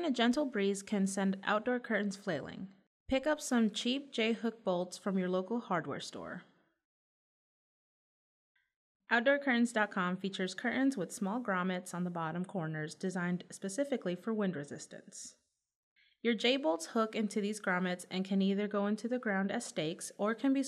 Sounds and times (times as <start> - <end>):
Speech: 0.0 - 6.5, 9.1 - 15.4, 16.3 - 20.6.